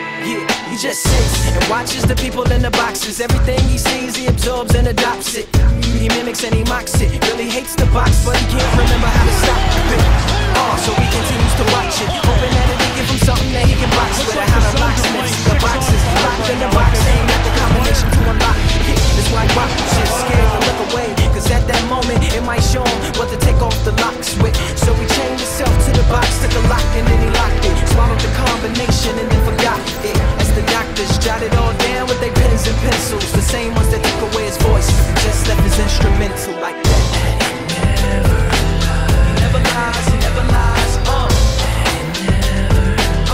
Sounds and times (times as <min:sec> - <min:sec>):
Exciting music: 0:00.0 - 0:43.3
Speech: 0:08.2 - 0:21.2.